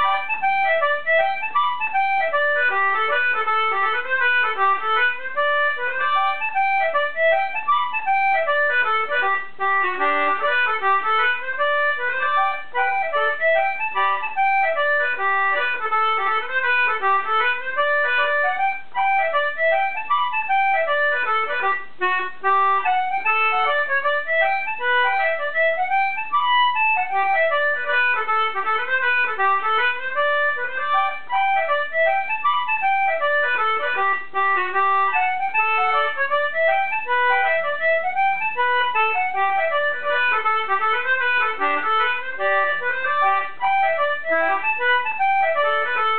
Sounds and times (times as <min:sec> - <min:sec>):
Accordion: 0:00.0 - 0:46.1.